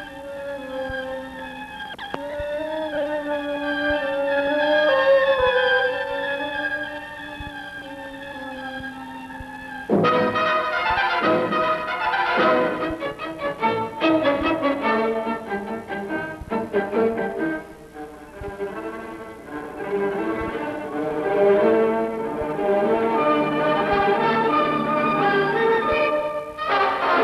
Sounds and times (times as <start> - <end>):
Orchestra: 0.0 - 27.2.